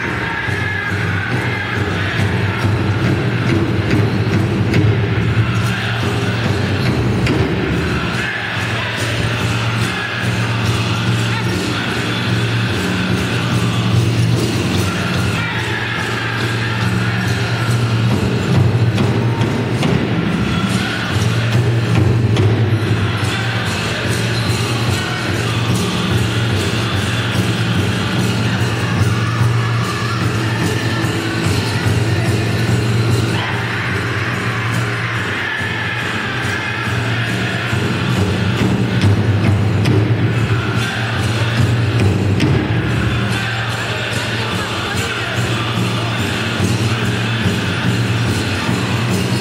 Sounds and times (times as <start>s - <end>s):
Music: 0.0s - 49.4s.